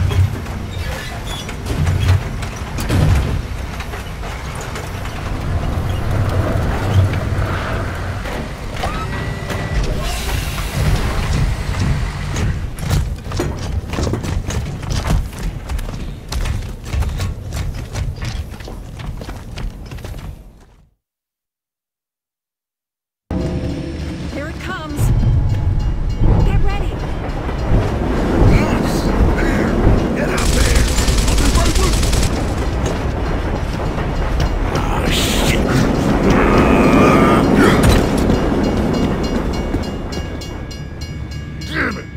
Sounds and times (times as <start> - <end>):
Speech: 28.5 - 32.0, 34.7 - 37.8, 41.7 - 42.1.